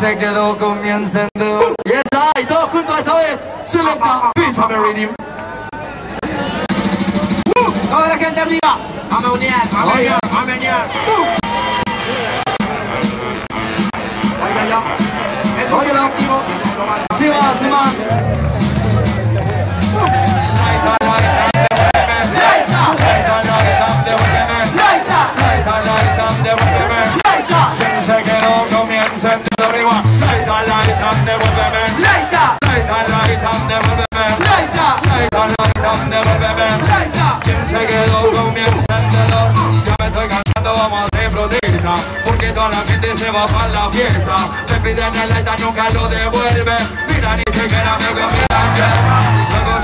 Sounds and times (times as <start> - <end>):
Music: 6.0 - 49.8
Speech: 14.4 - 19.6.